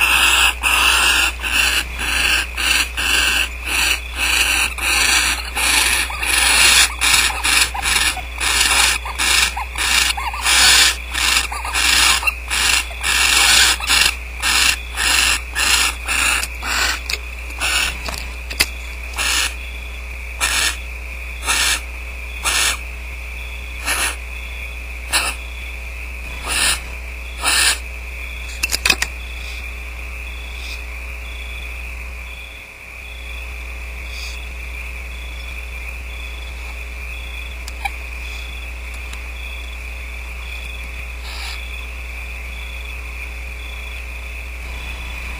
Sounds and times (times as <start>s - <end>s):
Animal: 0.0s - 19.8s, 20.4s - 22.8s, 23.6s - 25.7s, 26.3s - 31.7s, 32.3s - 39.8s, 40.4s - 43.0s.